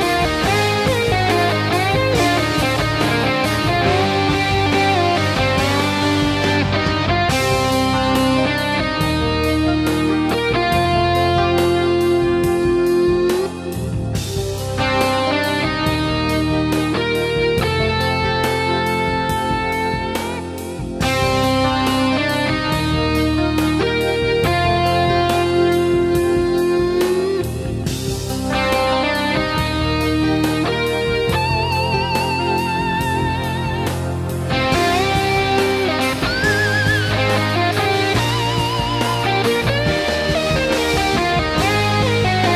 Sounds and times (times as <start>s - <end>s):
Guitar: 0.0s - 42.5s.